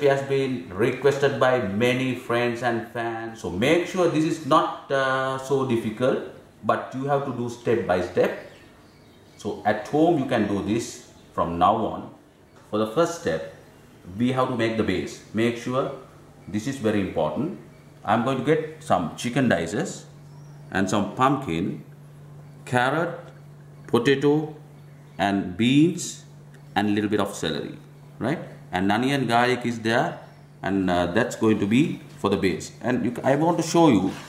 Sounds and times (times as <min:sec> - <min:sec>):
Speech: 0:00.0 - 0:08.6, 0:09.4 - 0:21.9, 0:22.6 - 0:23.3, 0:23.9 - 0:24.6, 0:25.2 - 0:34.2.